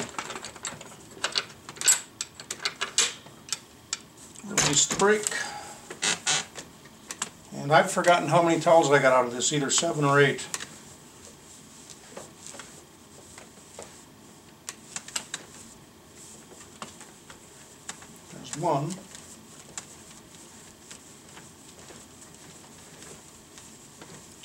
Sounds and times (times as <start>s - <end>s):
Speech: 4.4s - 5.6s, 7.5s - 10.6s, 18.3s - 19.1s.